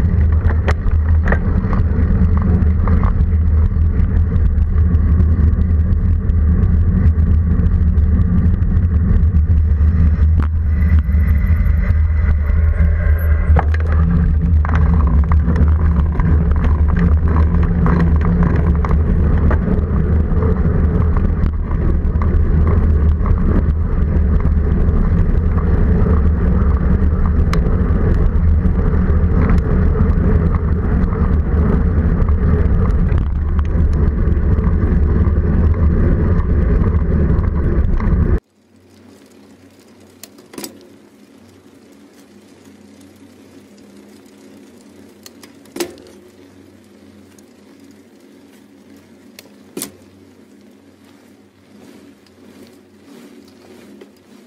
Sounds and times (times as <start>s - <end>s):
Bicycle: 0.0s - 54.4s
Outside, urban or manmade: 0.0s - 54.4s.